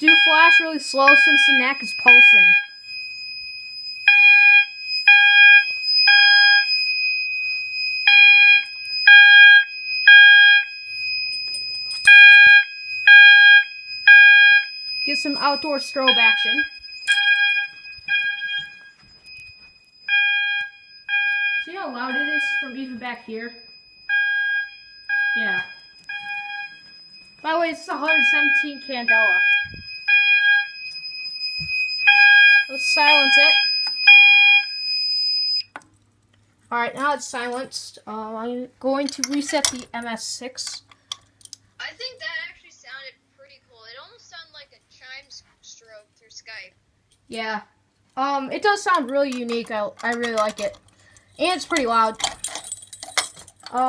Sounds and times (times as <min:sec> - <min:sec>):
Speech: 0:00.0 - 0:02.5, 0:15.1 - 0:16.7, 0:21.7 - 0:23.6, 0:32.7 - 0:33.6, 0:41.8 - 0:50.8, 0:51.4 - 0:52.2
Fire alarm: 0:00.0 - 0:35.7, 0:48.6 - 0:53.8.